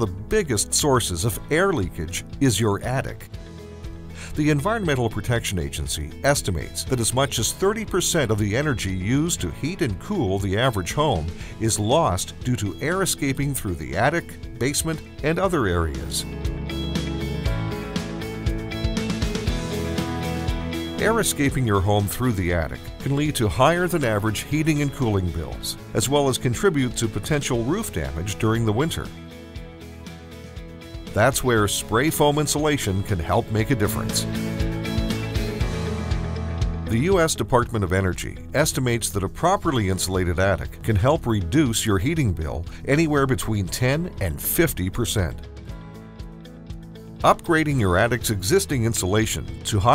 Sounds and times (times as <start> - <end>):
Speech: 0.0 - 3.3, 4.2 - 16.3, 21.0 - 29.1, 31.2 - 34.3, 36.9 - 45.4, 47.2 - 49.9
Music: 0.0 - 49.9.